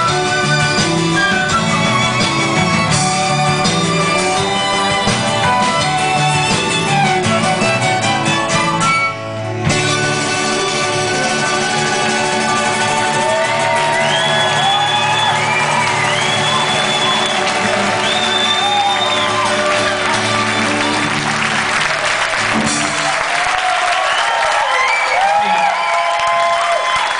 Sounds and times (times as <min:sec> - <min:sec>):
Bluegrass: 0:00.0 - 0:23.0.